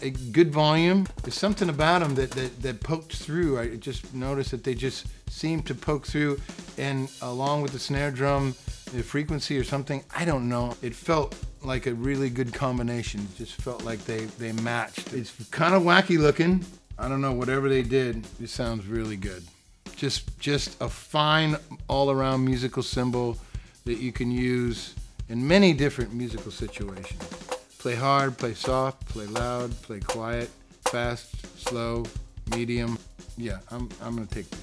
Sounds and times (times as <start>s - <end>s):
Speech: 0.0s - 27.2s, 27.8s - 34.6s
Drum: 0.0s - 34.6s
Drum kit: 0.0s - 34.6s.